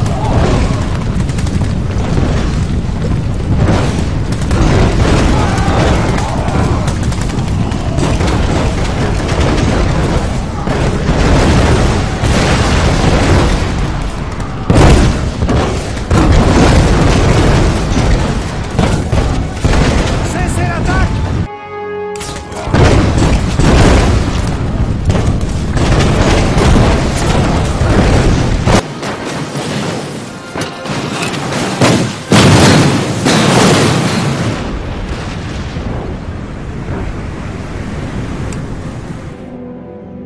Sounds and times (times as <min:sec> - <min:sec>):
Artillery fire: 0:00.0 - 0:21.5, 0:22.6 - 0:38.0.